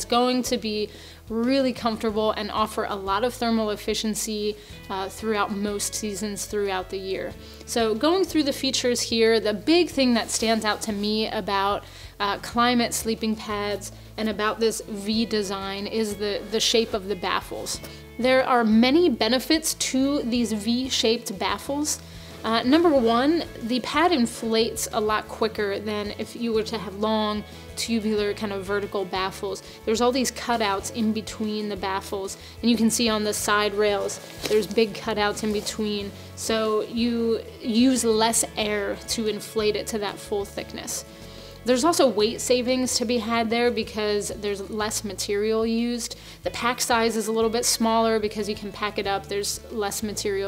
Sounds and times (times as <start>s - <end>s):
Music: 0.0s - 50.4s
Speech: 0.0s - 50.4s.